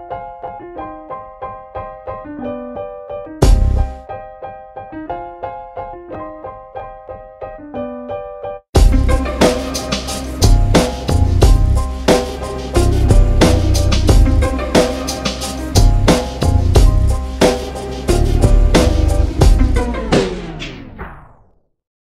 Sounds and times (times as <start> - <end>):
Music: 0.0 - 21.8.